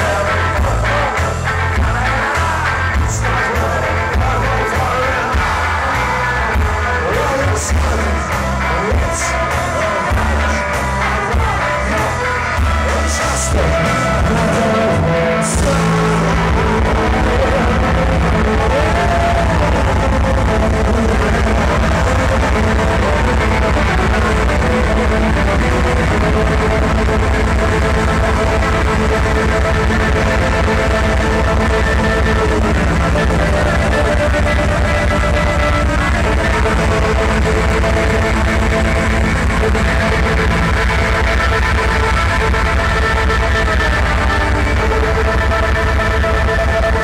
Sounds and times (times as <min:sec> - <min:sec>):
Punk rock: 0:00.0 - 0:47.0.